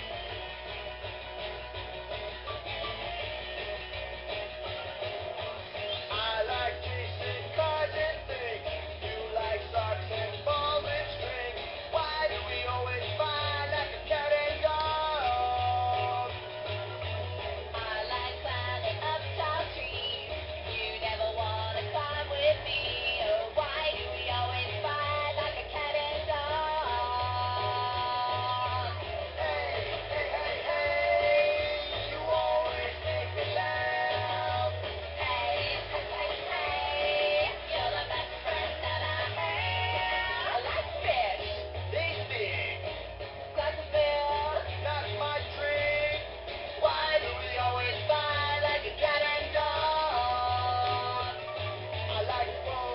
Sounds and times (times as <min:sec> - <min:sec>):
Jingle (music): 0:00.0 - 0:52.9.